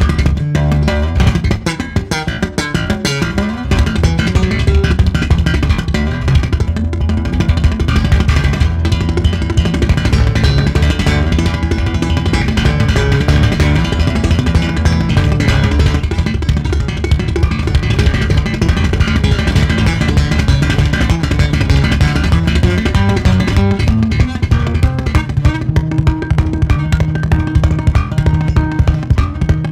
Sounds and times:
Music: 0.0s - 29.7s.

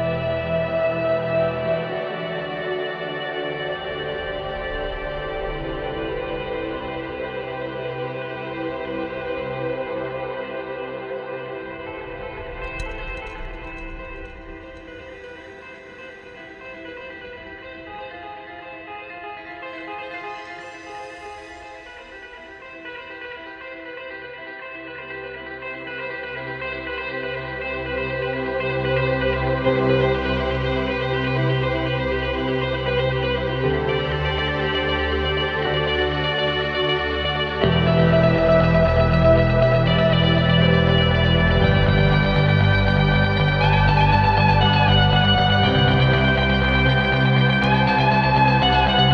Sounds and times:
Music: 0.0s - 49.1s.

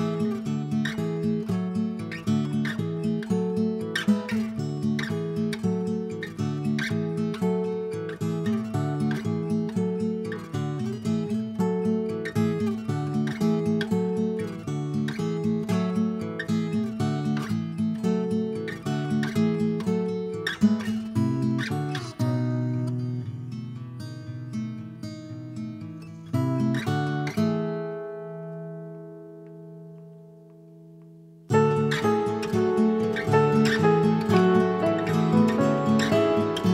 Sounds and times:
Music: 0.0s - 36.7s.

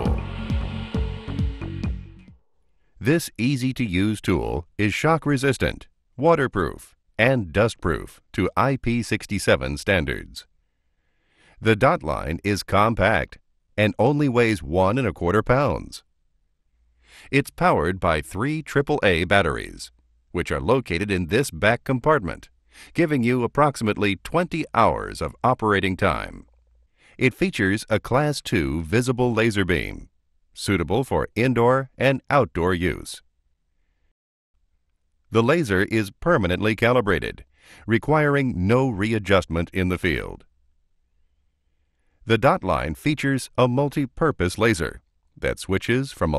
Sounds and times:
Speech: 3.0s - 10.5s, 11.6s - 16.0s, 17.3s - 26.5s, 27.2s - 33.2s, 35.3s - 40.5s, 42.3s - 46.3s.

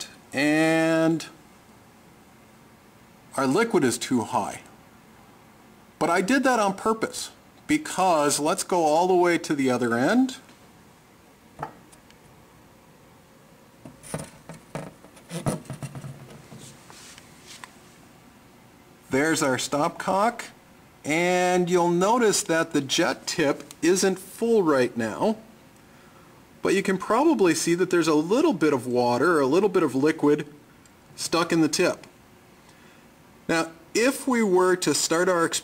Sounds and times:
Speech: 0.0s - 1.4s, 3.3s - 4.7s, 6.0s - 10.5s, 19.1s - 25.5s, 26.6s - 30.6s, 31.2s - 32.1s, 33.5s - 35.6s.

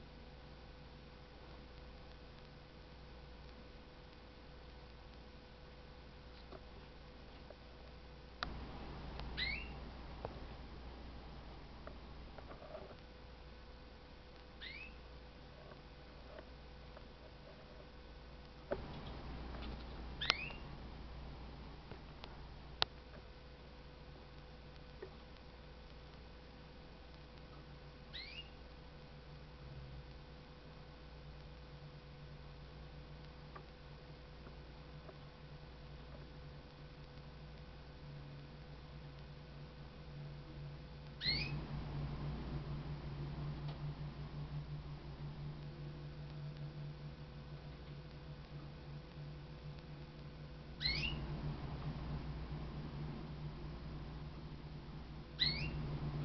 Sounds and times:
Bird: 9.3s - 9.8s, 14.6s - 15.1s, 18.8s - 20.7s, 28.1s - 28.6s, 41.2s - 41.7s, 50.8s - 51.3s, 55.4s - 55.9s
Domestic animals, pets: 9.4s - 9.8s, 14.6s - 15.0s, 18.9s - 20.7s, 28.1s - 28.6s, 41.2s - 41.6s, 50.8s - 51.2s, 55.4s - 55.8s.

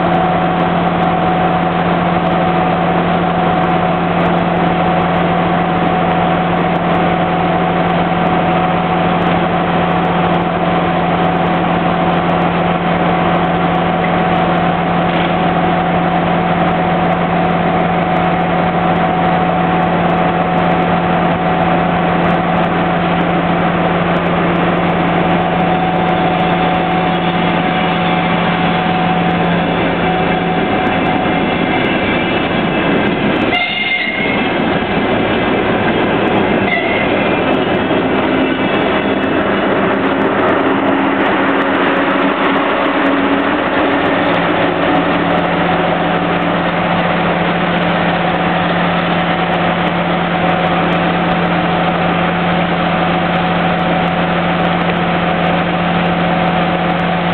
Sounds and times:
Railroad car, train wagon: 0.0s - 57.3s
Train horn: 33.5s - 34.6s, 36.6s - 37.2s.

